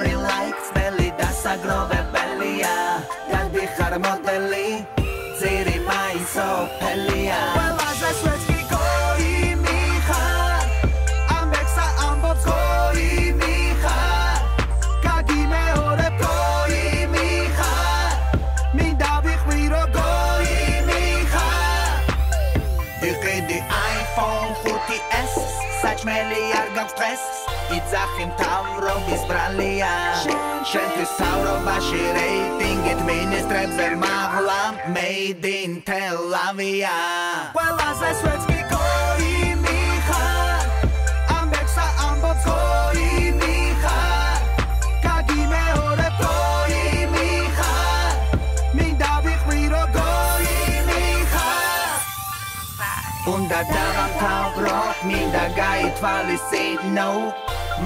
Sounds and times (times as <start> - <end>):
Exciting music: 0.0 - 35.2, 37.5 - 57.8
Soundtrack music: 0.0 - 35.3, 37.6 - 57.8.